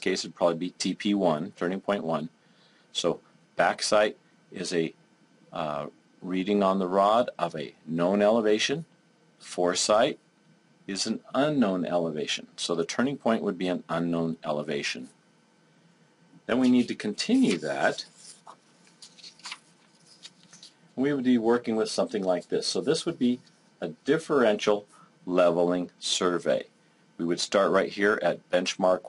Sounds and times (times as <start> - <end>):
Speech: 0.0 - 2.3, 2.9 - 10.2, 10.9 - 15.2, 16.5 - 18.2, 21.0 - 29.0.